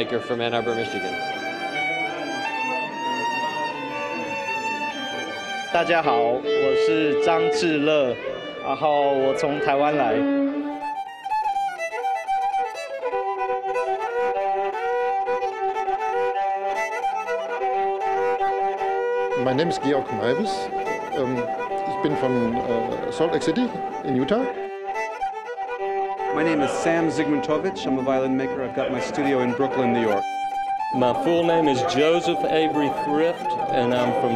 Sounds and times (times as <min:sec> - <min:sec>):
Violin, fiddle: 0:00.0 - 0:34.3.